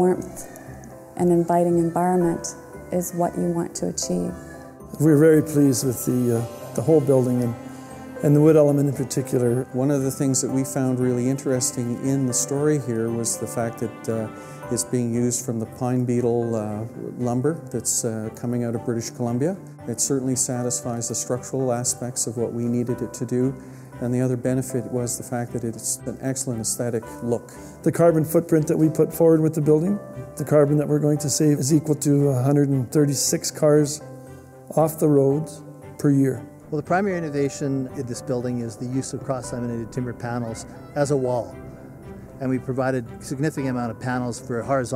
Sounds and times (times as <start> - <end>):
Music: 0.0 - 44.9
Speech: 8.2 - 34.0, 34.7 - 41.5, 42.4 - 44.9.